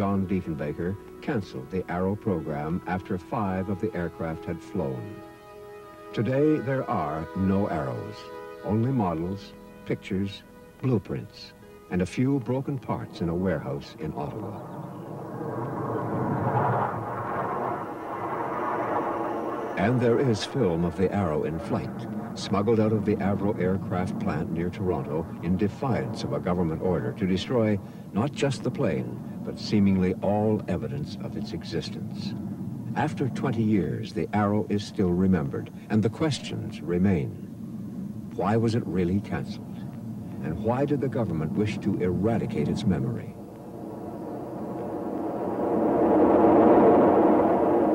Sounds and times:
Speech: 0:00.0 - 0:05.2, 0:06.1 - 0:14.6, 0:19.8 - 0:32.4, 0:33.0 - 0:37.4, 0:38.4 - 0:39.6, 0:40.4 - 0:43.4
Music: 0:00.0 - 0:14.5, 0:19.8 - 0:29.8.

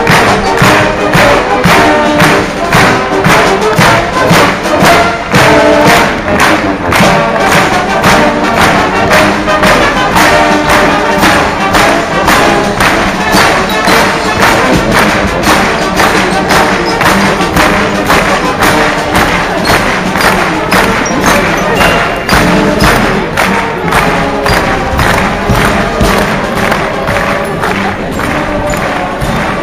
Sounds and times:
Music: 0:00.0 - 0:29.6.

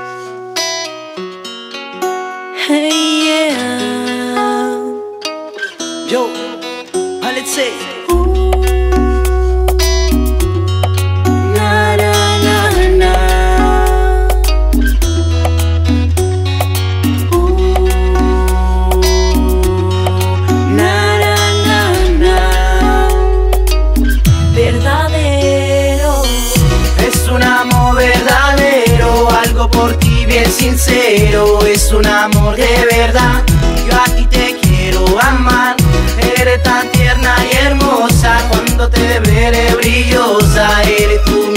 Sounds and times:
Music: 0:00.0 - 0:41.5.

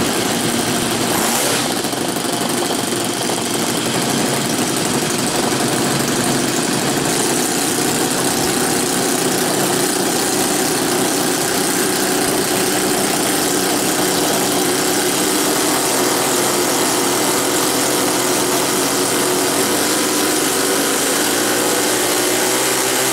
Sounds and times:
Vehicle: 0:00.0 - 0:23.1.

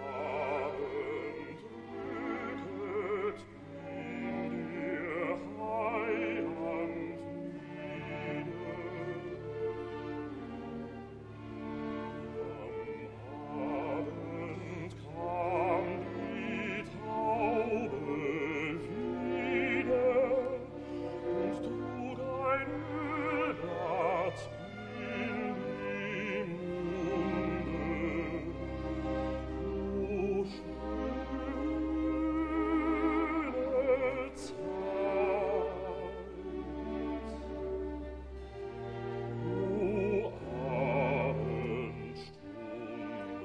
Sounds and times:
Inside, large room or hall: 0:00.0 - 0:16.9
Bowed string instrument: 0:00.0 - 0:43.4.

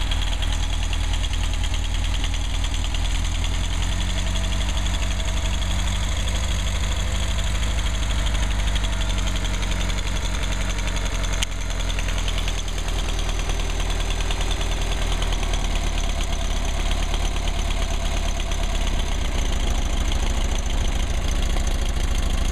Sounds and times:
Idling: 0:00.0 - 0:22.5.

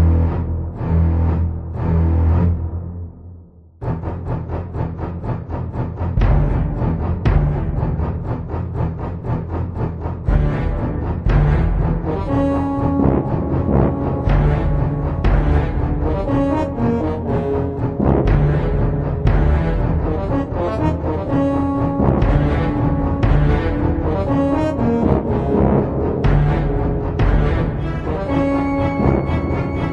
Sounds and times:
Music: 0:00.0 - 0:29.9.

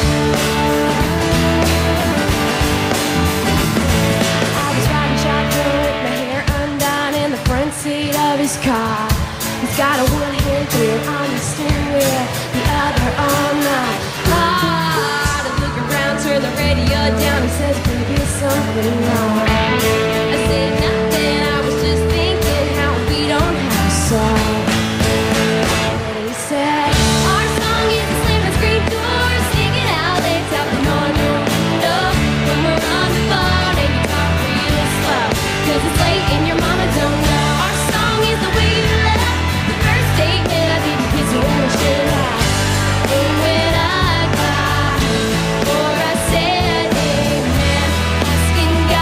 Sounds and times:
Music: 0:00.0 - 0:49.0.

